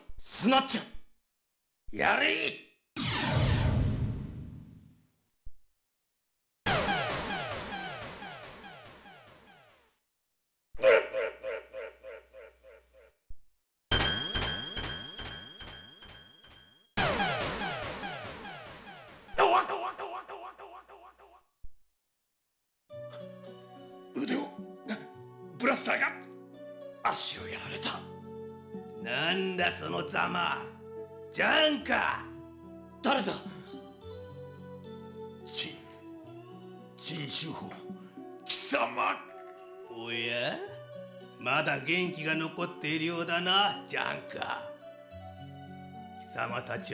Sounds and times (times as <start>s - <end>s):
Speech: 0.2s - 1.0s, 1.9s - 2.7s, 24.2s - 25.0s, 25.6s - 26.2s, 27.0s - 28.1s, 29.0s - 30.7s, 31.4s - 32.3s, 33.0s - 33.5s, 37.0s - 37.8s, 38.5s - 39.3s, 39.9s - 40.7s, 41.4s - 44.7s, 46.2s - 46.9s
Music: 22.9s - 46.9s.